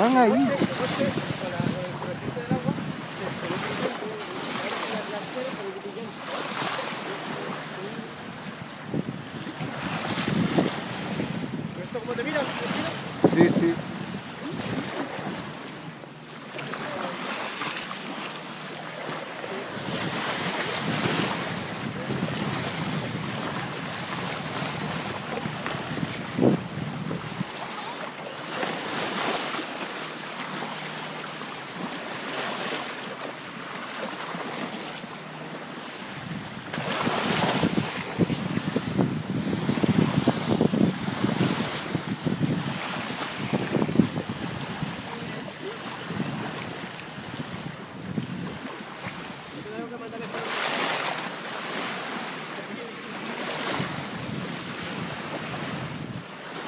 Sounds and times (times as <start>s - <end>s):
Speech: 0.0s - 8.2s, 49.6s - 50.6s, 52.5s - 53.3s
Sailboat, sailing ship: 0.0s - 56.6s.